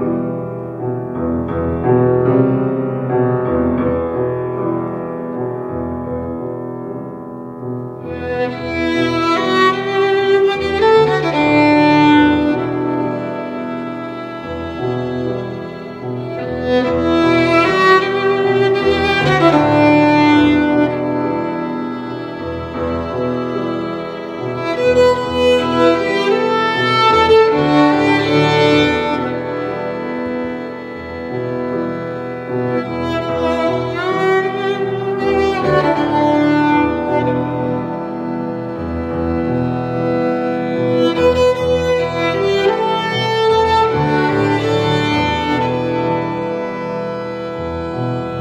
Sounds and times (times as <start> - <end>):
Violin, fiddle: 8.0 - 48.4.